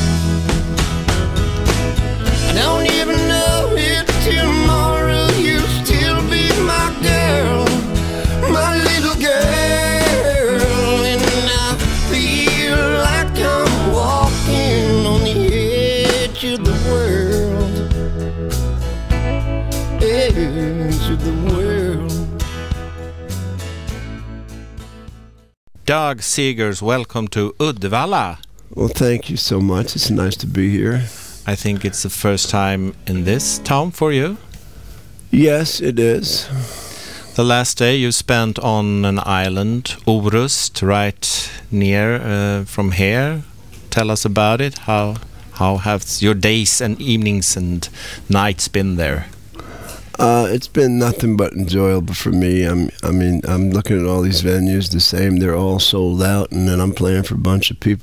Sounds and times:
Music: 0.0s - 25.6s, 33.2s - 33.9s.

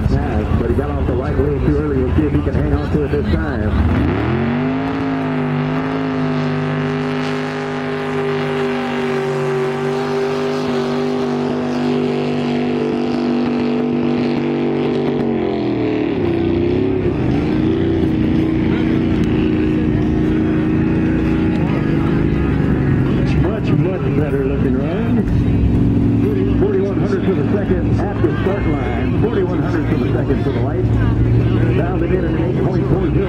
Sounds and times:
Motorboat, speedboat: 0.0s - 33.2s.

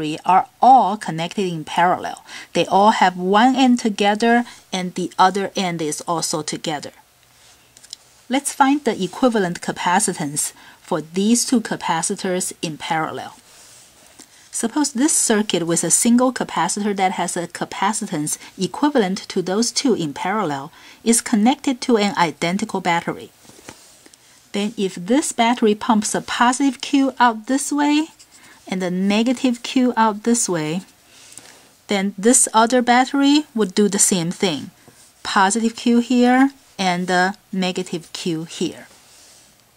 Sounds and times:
Speech: 0.0s - 7.0s, 8.3s - 13.4s, 14.6s - 23.3s, 24.5s - 30.9s, 31.9s - 38.9s.

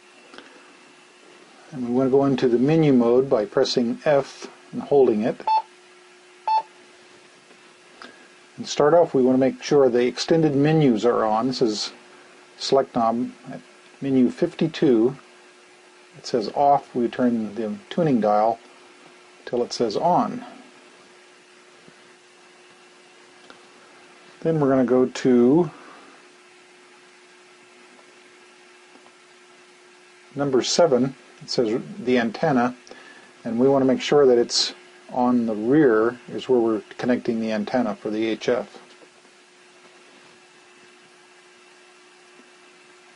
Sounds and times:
Speech: 1.7s - 5.5s, 8.6s - 12.0s, 12.6s - 15.2s, 16.2s - 18.6s, 19.4s - 20.6s, 24.4s - 26.0s, 30.3s - 32.8s, 33.4s - 38.9s.

